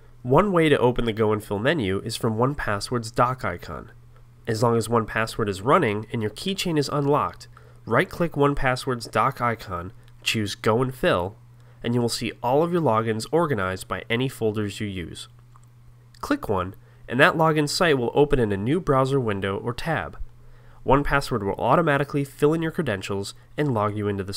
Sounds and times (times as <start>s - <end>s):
Speech: 0.3s - 15.4s, 16.2s - 24.3s.